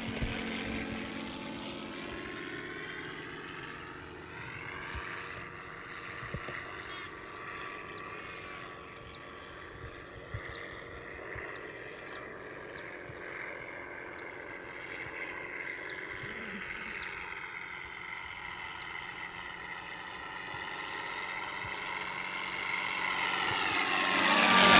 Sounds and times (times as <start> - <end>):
Fixed-wing aircraft, airplane: 0.0 - 24.7.